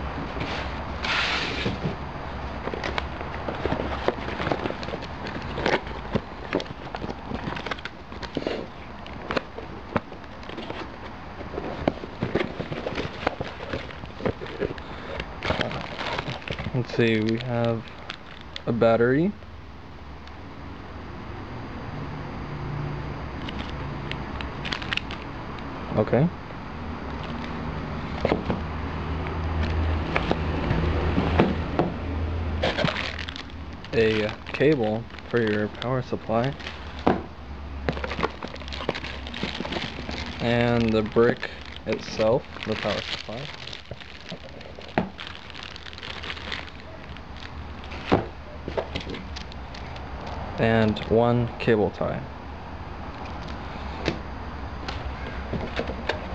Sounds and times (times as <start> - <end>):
Outside, urban or manmade: 0.0 - 56.3
Speech: 25.9 - 26.3, 33.9 - 36.6, 40.4 - 43.5, 50.6 - 52.3.